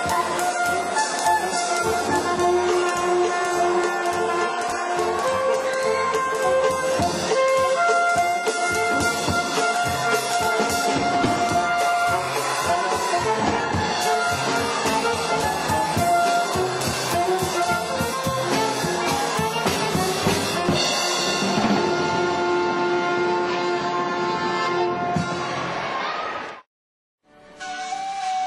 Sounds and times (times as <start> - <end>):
Wind instrument, woodwind instrument: 0.0 - 26.2, 27.3 - 28.4.